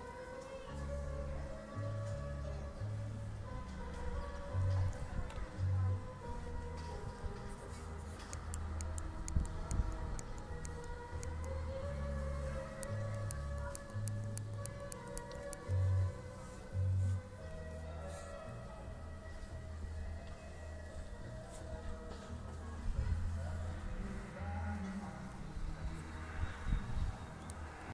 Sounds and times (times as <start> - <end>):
Music: 0.0 - 27.9.